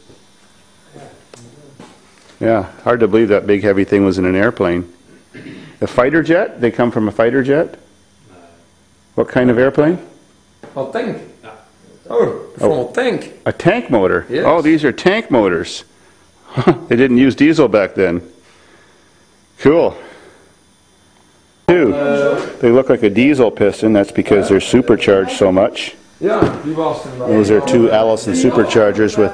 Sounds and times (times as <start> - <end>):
Speech: 2.4 - 4.9, 5.8 - 8.6, 9.2 - 15.9, 16.9 - 18.3, 21.7 - 29.3.